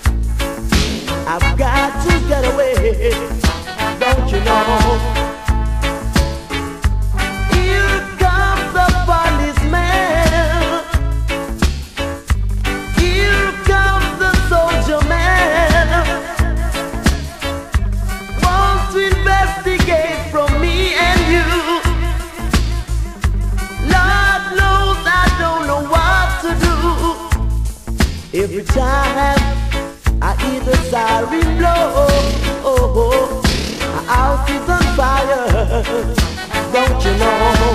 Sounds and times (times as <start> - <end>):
Music: 0.0 - 37.7.